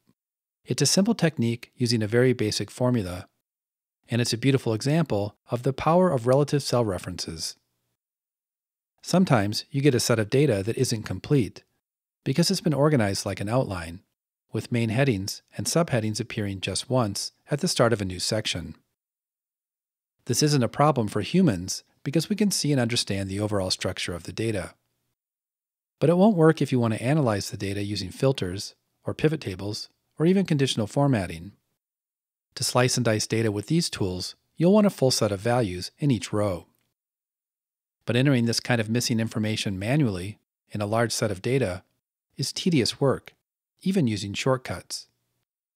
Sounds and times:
Speech: 0.7 - 3.4, 4.1 - 7.6, 9.0 - 18.8, 20.2 - 24.8, 26.0 - 31.6, 32.6 - 36.8, 38.0 - 45.1.

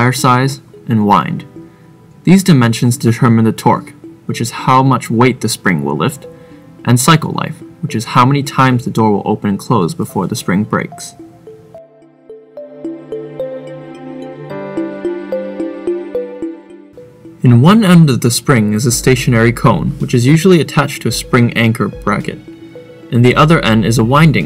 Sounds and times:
Speech: 0.0 - 1.5, 2.2 - 11.2, 17.4 - 22.4, 23.1 - 24.4
Music: 0.0 - 24.4.

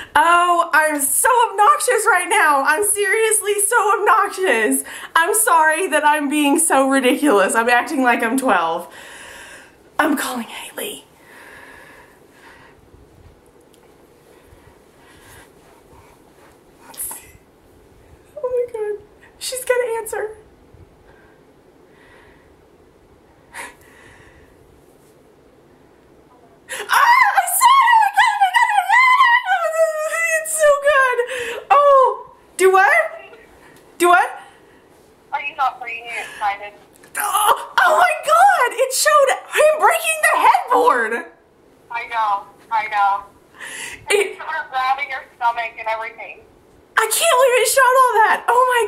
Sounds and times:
Inside, small room: 0.0 - 48.8
Speech: 0.2 - 8.9, 10.0 - 11.1, 18.4 - 20.4, 26.8 - 33.4, 34.0 - 34.4, 35.3 - 43.3, 44.1 - 46.4, 47.0 - 48.8.

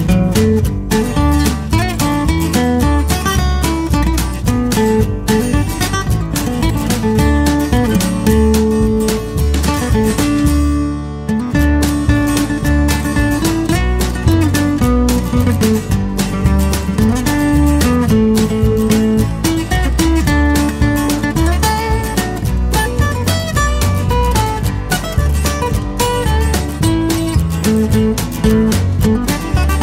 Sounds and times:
Music: 0.0 - 29.8.

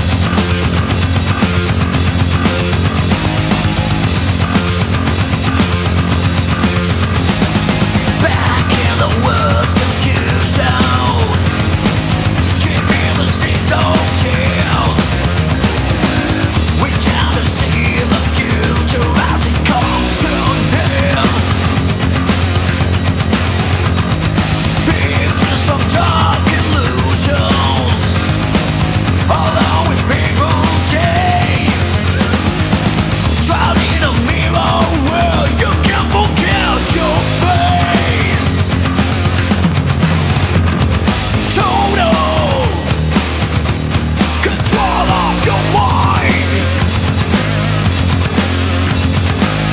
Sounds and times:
Rhythm and blues: 0.0 - 49.7.

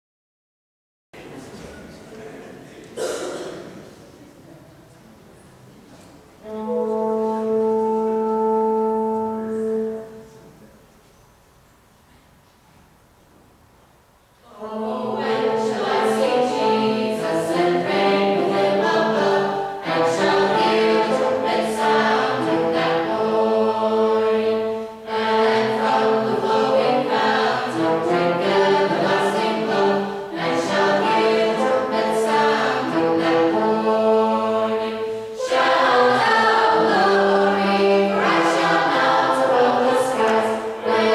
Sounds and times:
Trumpet: 6.4 - 10.7, 15.2 - 41.1.

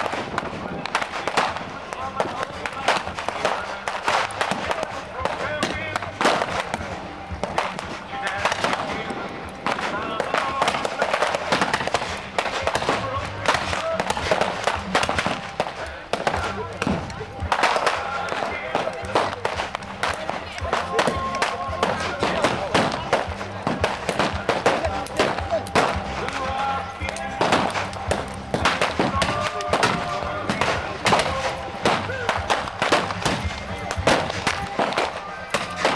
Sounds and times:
Speech: 0.0 - 35.9.

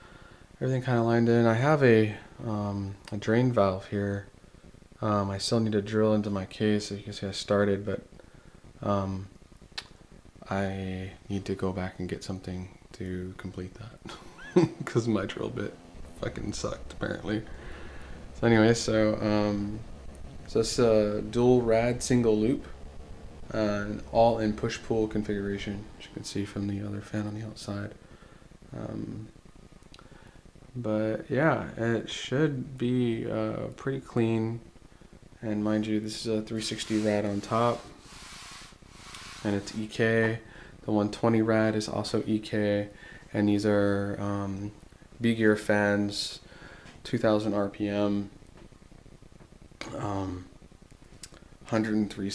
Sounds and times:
Speech: 0.6 - 4.3, 5.0 - 8.1, 8.8 - 9.3, 10.4 - 17.5, 18.4 - 19.9, 20.5 - 22.8, 23.5 - 28.0, 28.7 - 29.4, 30.7 - 34.7, 35.4 - 38.0, 39.4 - 48.4, 49.8 - 50.5, 51.6 - 52.3.

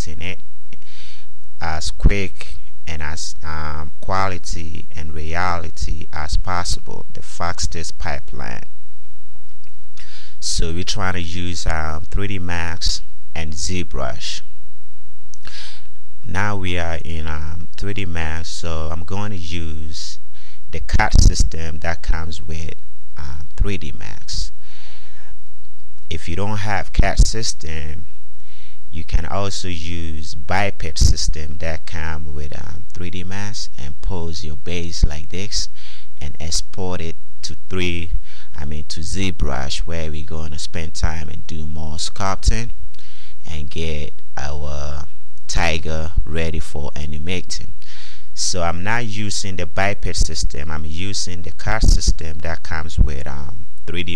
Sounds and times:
Speech: 0.0 - 0.4, 1.6 - 8.7, 10.0 - 14.5, 15.5 - 24.6, 26.1 - 28.0, 29.0 - 42.8, 43.4 - 47.8, 48.4 - 54.1.

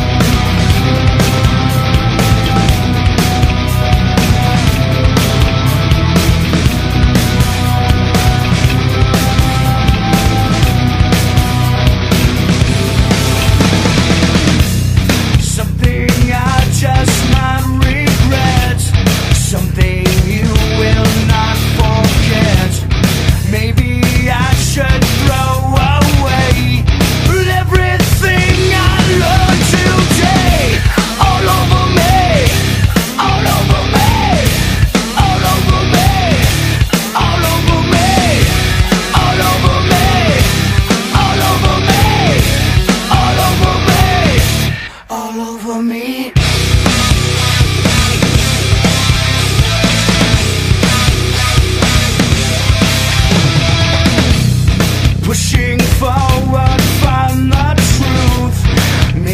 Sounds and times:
Music: 0.0 - 59.3.

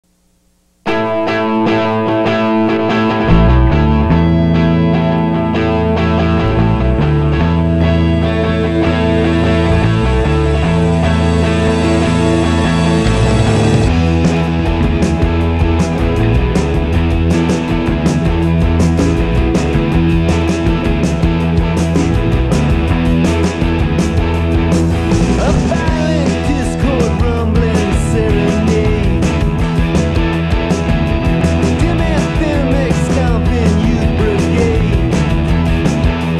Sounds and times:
Distortion: 0.0 - 36.3
Music: 0.8 - 36.3.

